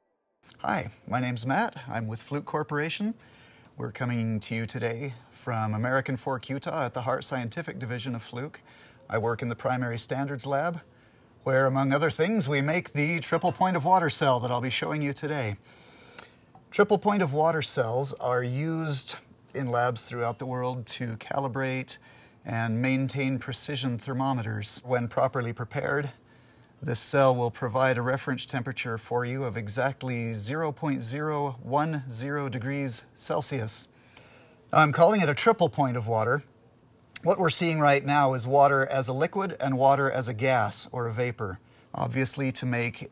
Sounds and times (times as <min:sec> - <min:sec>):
Speech: 0:00.5 - 0:03.2, 0:03.8 - 0:15.6, 0:16.7 - 0:26.2, 0:26.8 - 0:33.9, 0:34.7 - 0:36.5, 0:37.2 - 0:43.1.